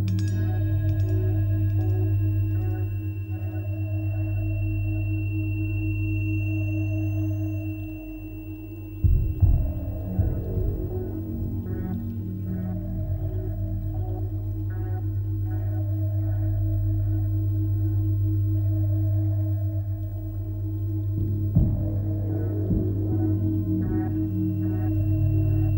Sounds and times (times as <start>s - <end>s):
Sad music: 0.0s - 25.7s.